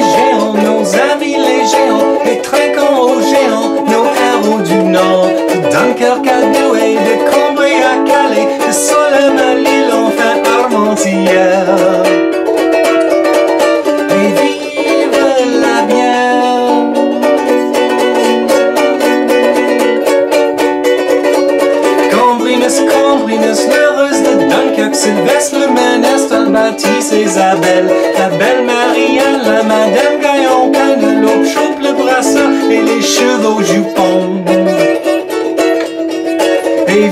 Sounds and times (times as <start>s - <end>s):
Inside, small room: 0.0s - 37.1s
Ukulele: 0.0s - 37.1s.